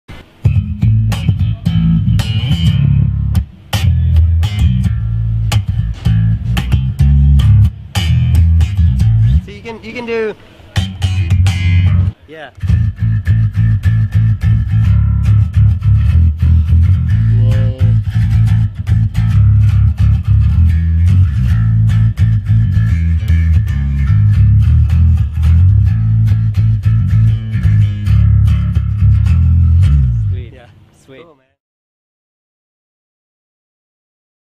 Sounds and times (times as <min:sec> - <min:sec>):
Bass guitar: 0:00.1 - 0:30.9
Speech: 0:09.3 - 0:10.9, 0:12.2 - 0:12.6, 0:17.3 - 0:18.0, 0:30.2 - 0:31.6.